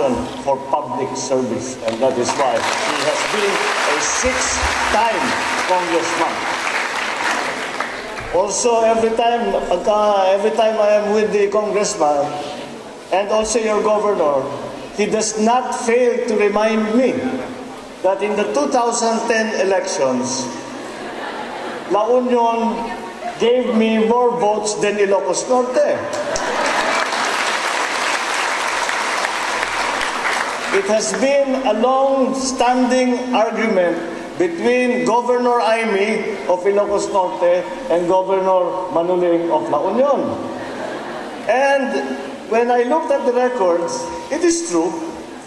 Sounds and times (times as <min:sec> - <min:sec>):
Speech: 0:00.0 - 0:06.4, 0:08.2 - 0:20.6, 0:21.9 - 0:26.2, 0:30.7 - 0:40.5, 0:41.5 - 0:45.2
Inside, large room or hall: 0:00.0 - 0:45.4.